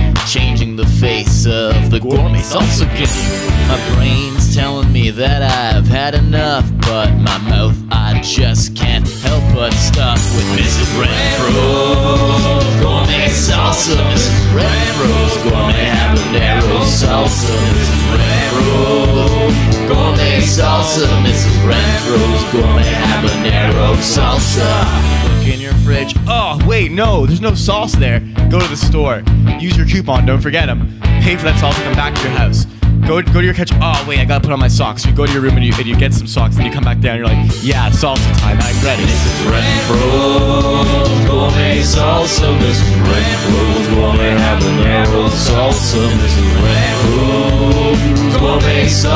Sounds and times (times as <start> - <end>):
Pop music: 0.0 - 28.1, 37.4 - 49.1
Jazz: 9.1 - 26.3.